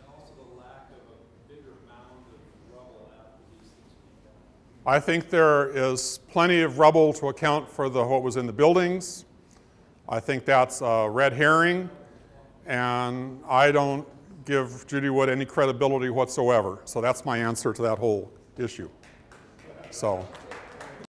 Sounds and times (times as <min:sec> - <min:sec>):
Speech: 0:00.0 - 0:09.2, 0:10.1 - 0:19.0, 0:19.8 - 0:20.4.